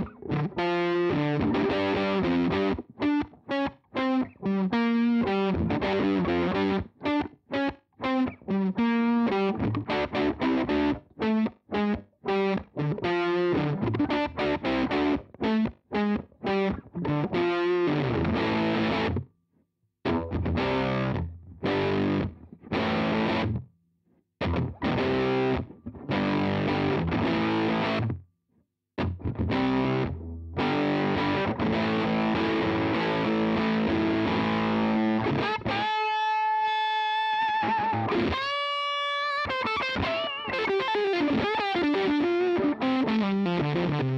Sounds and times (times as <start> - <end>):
Chorus effect: 0.0 - 19.3, 20.0 - 23.7, 24.4 - 28.2, 29.0 - 44.1
Distortion: 0.0 - 19.4, 20.0 - 23.8, 24.4 - 28.3, 29.0 - 44.1
Guitar: 0.0 - 19.4, 20.0 - 23.8, 24.4 - 28.3, 29.0 - 44.1.